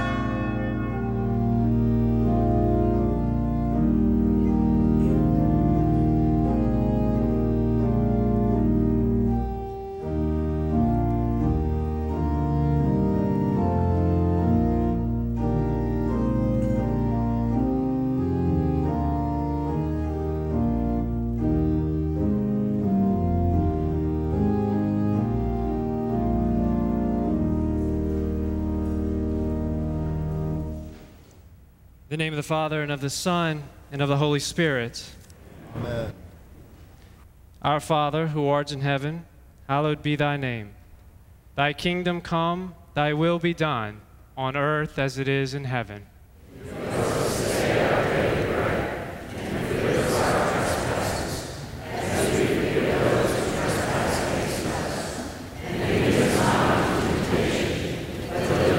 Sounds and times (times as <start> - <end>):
Music: 0.0 - 31.3, 46.7 - 51.1, 51.8 - 55.0, 55.6 - 58.7
Speech: 32.1 - 36.2, 37.6 - 40.8, 41.6 - 58.7.